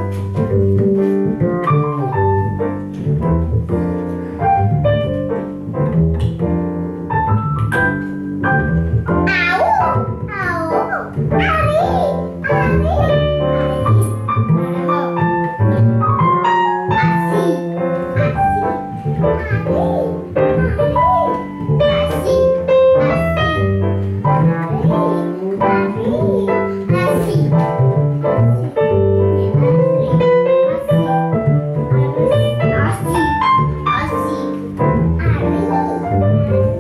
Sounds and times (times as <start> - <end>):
Music: 0.0 - 36.8
Speech: 9.3 - 15.2, 17.0 - 18.6, 24.7 - 27.6, 29.4 - 31.2, 32.0 - 36.4.